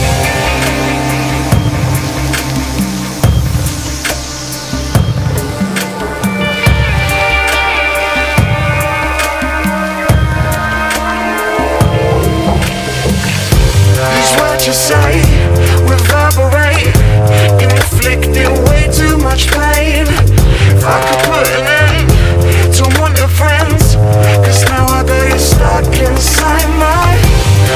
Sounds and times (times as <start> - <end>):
Music: 0.0 - 27.7.